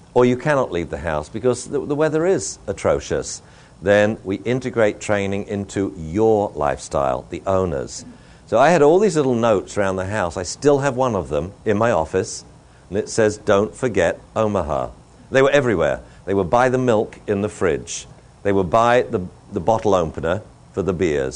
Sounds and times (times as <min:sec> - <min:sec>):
Speech: 0:00.2 - 0:21.3.